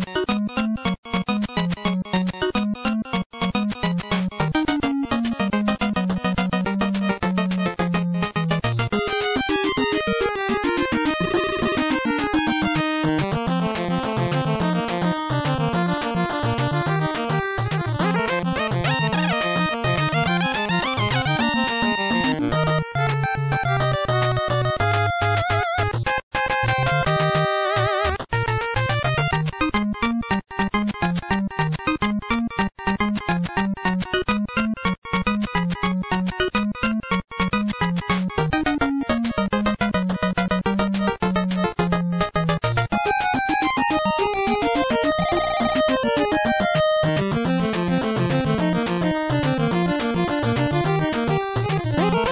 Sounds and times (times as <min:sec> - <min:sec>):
Music: 0:00.0 - 0:52.3.